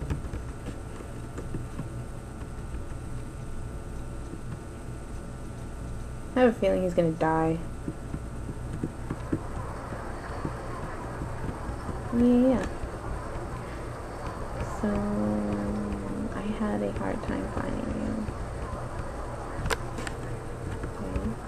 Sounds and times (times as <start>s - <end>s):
Speech: 6.4s - 7.7s, 12.1s - 12.8s, 14.6s - 18.3s, 21.0s - 21.4s.